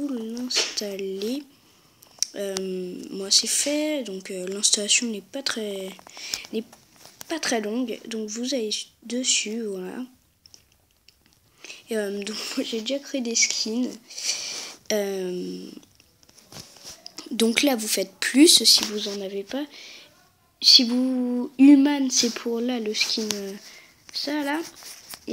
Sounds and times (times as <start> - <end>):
Speech: 0.0 - 1.5, 2.2 - 6.7, 7.3 - 10.2, 11.9 - 14.1, 14.9 - 15.8, 16.9 - 25.3.